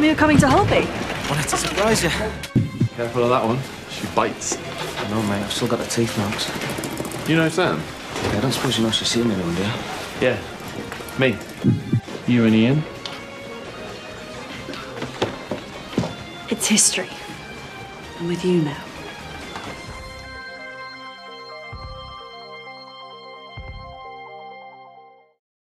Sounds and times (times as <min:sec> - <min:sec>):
Music: 0:00.0 - 0:25.4.